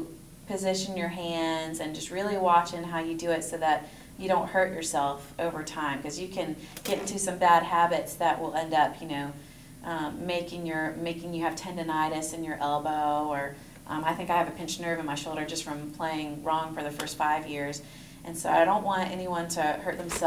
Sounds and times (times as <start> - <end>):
Speech: 0.0 - 20.2.